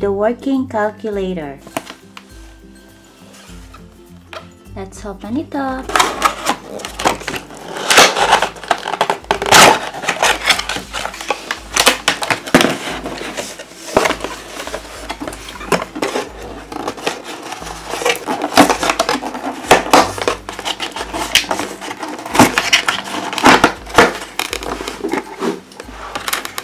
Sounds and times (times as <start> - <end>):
Music: 0.0 - 26.6.